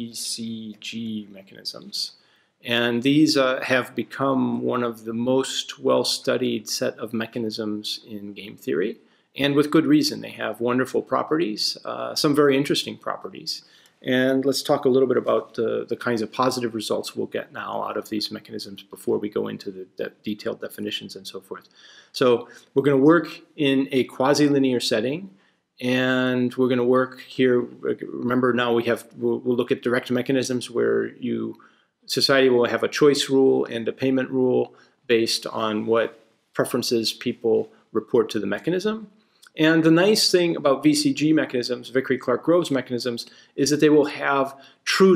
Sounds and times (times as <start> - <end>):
Speech: 0.0 - 45.1.